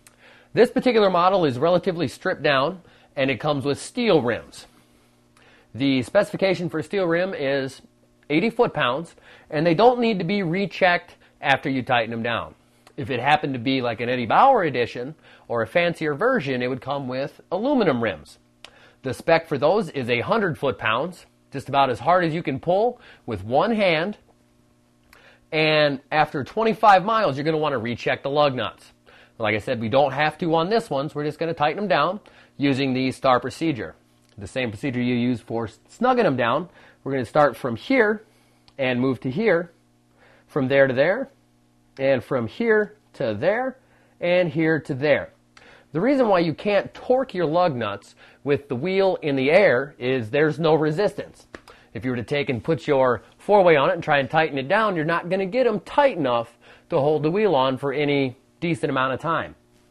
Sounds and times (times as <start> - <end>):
Speech: 0.6 - 4.7, 5.7 - 18.4, 19.0 - 24.2, 25.5 - 39.8, 40.5 - 41.4, 42.0 - 59.6.